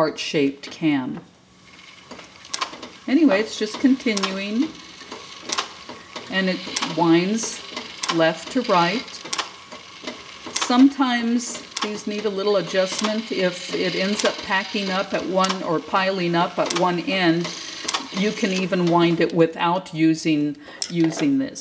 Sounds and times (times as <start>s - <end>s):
Speech: 0.0s - 1.3s, 3.1s - 4.7s, 6.3s - 9.2s, 10.6s - 21.6s
Sewing machine: 1.7s - 19.2s.